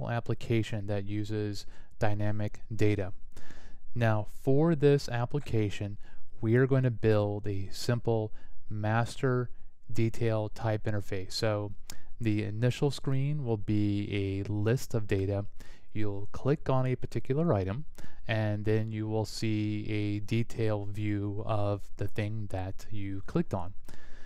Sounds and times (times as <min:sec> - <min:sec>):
Speech: 0:00.0 - 0:03.2, 0:04.0 - 0:23.8.